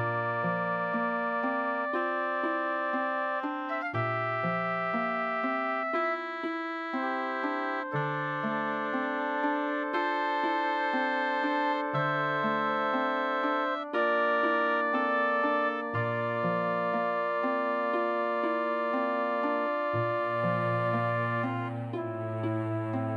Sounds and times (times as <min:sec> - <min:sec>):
Music: 0:00.0 - 0:23.1.